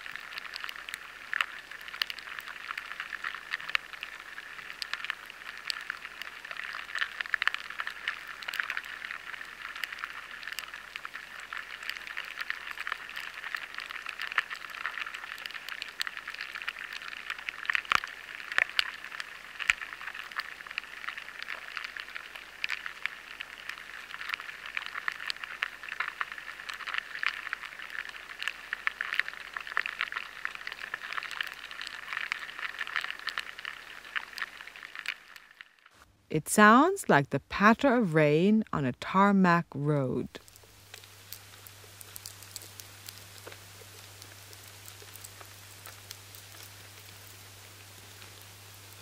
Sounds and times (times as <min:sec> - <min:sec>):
Noise: 0:00.0 - 0:49.0.